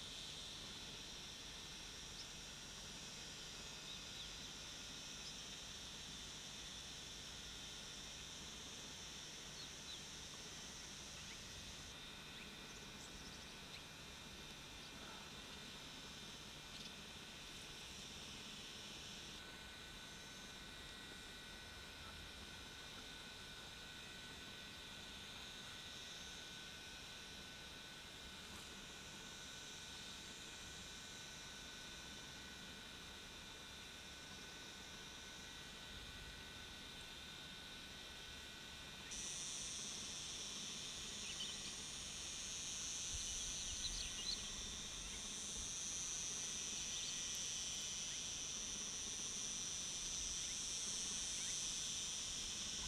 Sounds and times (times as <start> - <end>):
Outside, rural or natural: 0.0 - 52.8.